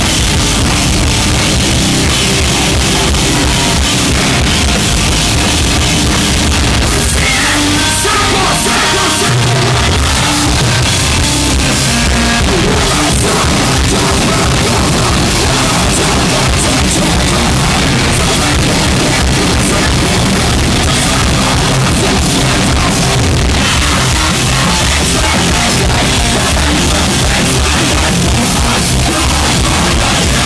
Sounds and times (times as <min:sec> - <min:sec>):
Music: 0:00.0 - 0:30.4.